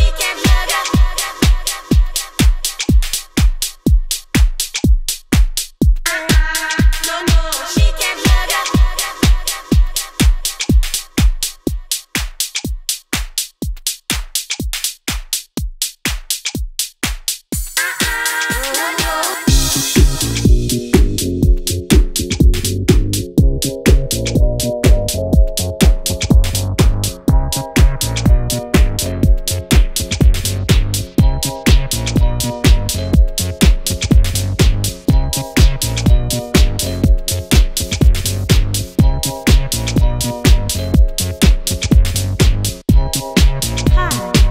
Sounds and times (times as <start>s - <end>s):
Music: 0.0s - 44.5s.